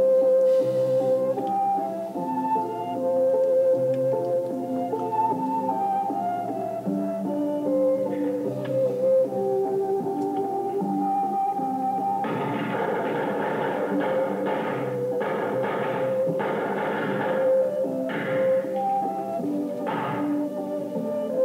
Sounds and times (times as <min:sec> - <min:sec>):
Music: 0:00.0 - 0:21.4.